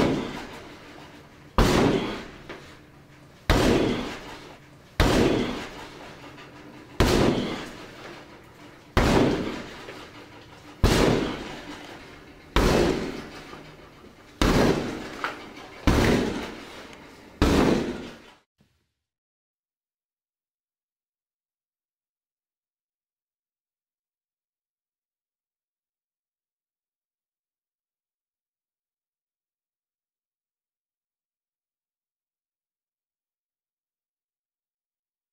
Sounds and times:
Door: 14.4s - 18.3s.

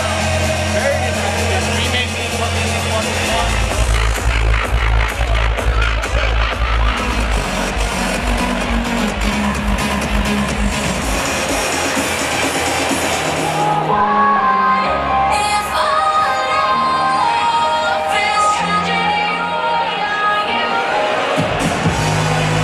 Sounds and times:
Crowd: 0.0s - 22.6s
Music: 0.0s - 22.6s
Speech: 0.7s - 3.7s.

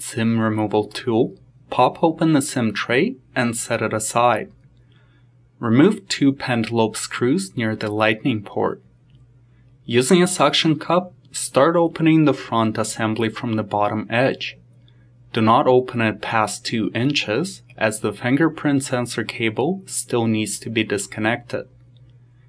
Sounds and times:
Speech: 0.0s - 4.6s, 5.6s - 8.9s, 9.8s - 14.6s, 15.3s - 21.8s.

